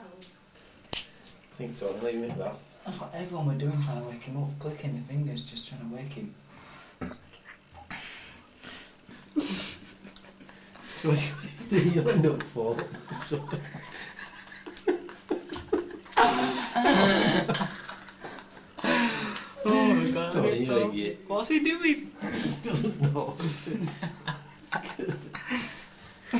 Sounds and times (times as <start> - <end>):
Male speech, man speaking: 1.6 - 6.4, 11.0 - 13.7, 19.6 - 22.1.